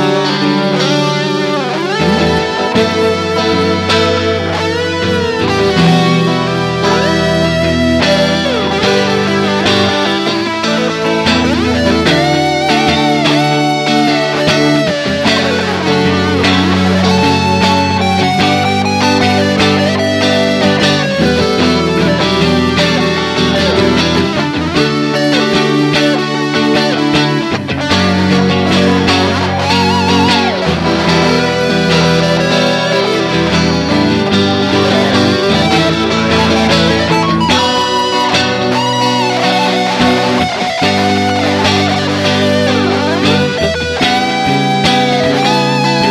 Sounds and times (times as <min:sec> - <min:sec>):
Music: 0:00.0 - 0:46.1.